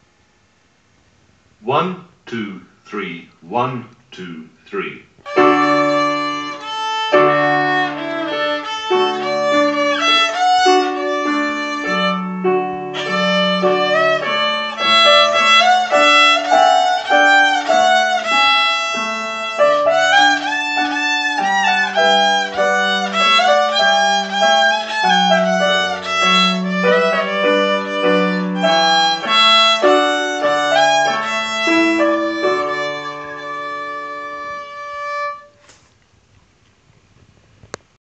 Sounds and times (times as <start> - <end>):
Violin, fiddle: 5.3 - 35.6.